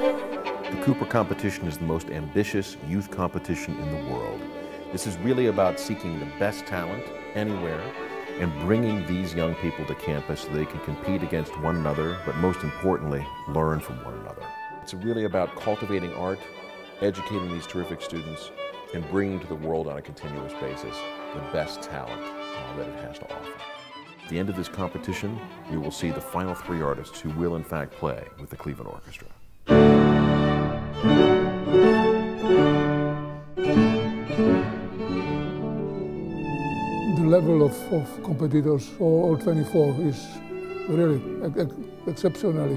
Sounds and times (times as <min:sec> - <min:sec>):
Violin, fiddle: 0:00.0 - 0:42.7
Speech: 0:00.7 - 0:23.6, 0:24.3 - 0:29.4, 0:37.0 - 0:42.7.